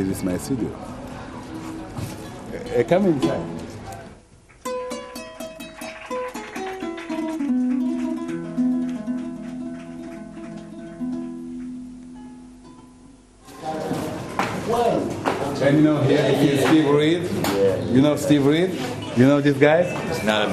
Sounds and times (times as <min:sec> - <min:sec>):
Music: 0:03.1 - 0:04.0, 0:04.6 - 0:13.2.